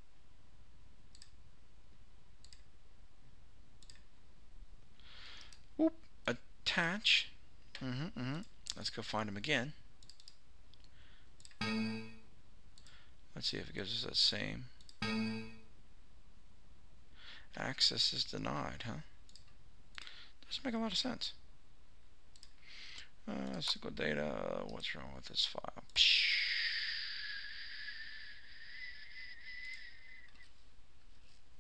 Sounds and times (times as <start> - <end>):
Speech: 5.8 - 9.8, 13.3 - 14.8, 17.6 - 19.2, 20.4 - 21.4, 23.2 - 26.5.